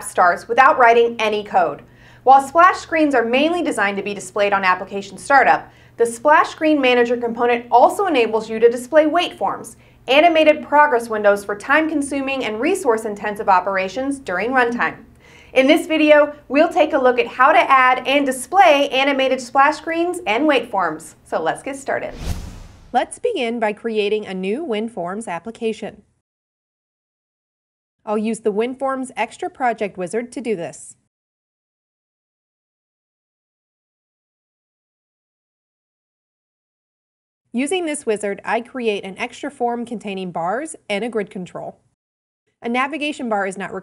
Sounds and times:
Speech: 0.0 - 22.2, 23.0 - 26.0, 28.1 - 31.1, 37.6 - 41.8, 42.6 - 43.8.

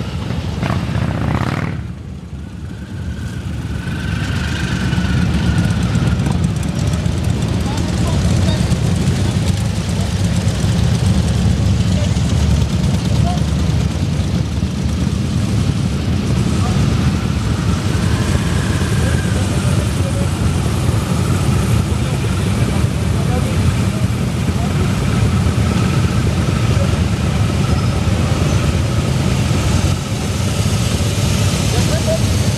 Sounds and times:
Motorcycle: 0.0 - 32.5
Traffic noise, roadway noise: 0.0 - 32.5
Speech: 7.6 - 8.8, 13.1 - 13.5, 19.0 - 20.4, 21.9 - 25.0, 31.7 - 32.3.

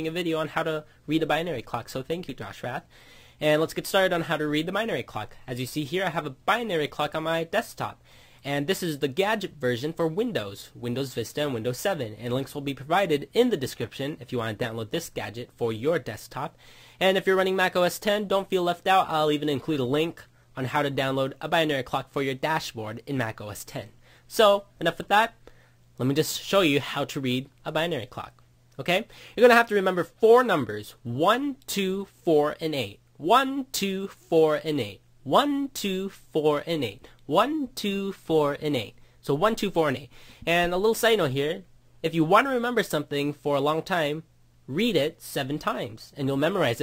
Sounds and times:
Speech: 0.0 - 25.4, 26.0 - 46.8.

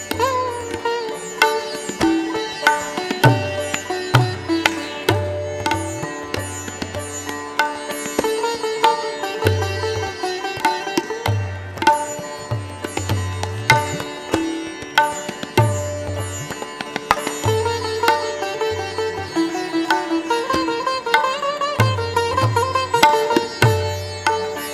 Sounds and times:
Tabla: 0.0 - 24.7.

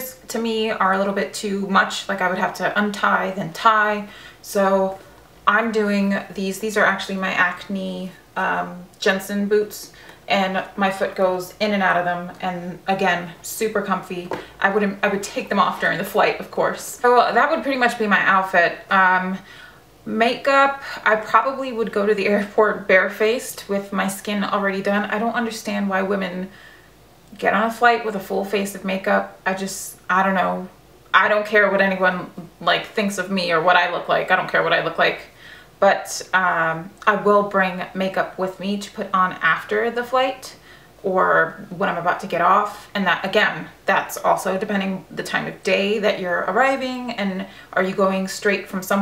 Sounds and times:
Speech: 0.0 - 26.6, 27.3 - 49.0.

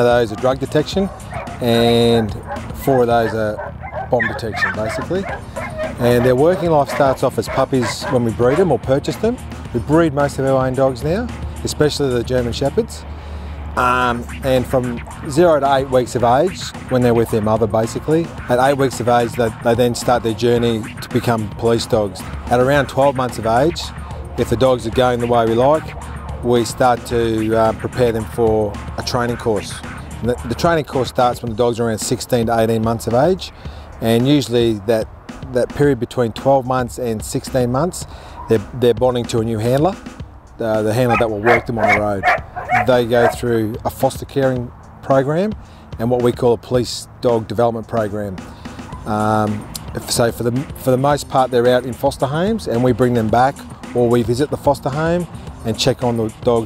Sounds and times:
Speech: 0.0 - 5.3, 5.9 - 13.0, 13.8 - 40.0, 40.6 - 48.4, 49.1 - 56.6
Music: 0.0 - 56.6
Bow-wow: 1.1 - 8.7, 41.1 - 43.4.

